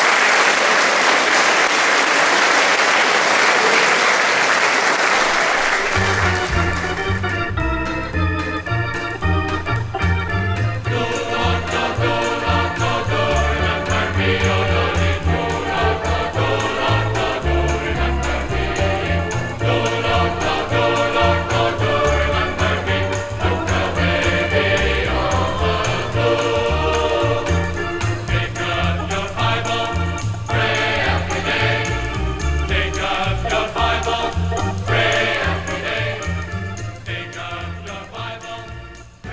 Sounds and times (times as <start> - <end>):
Choir: 10.8 - 39.3.